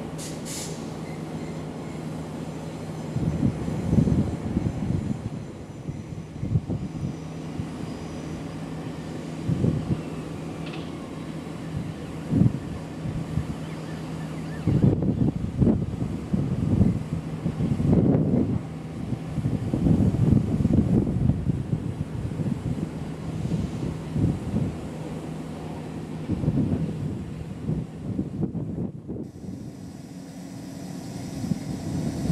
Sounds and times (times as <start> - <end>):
Vehicle: 0.0 - 32.3
Wind: 0.0 - 32.3.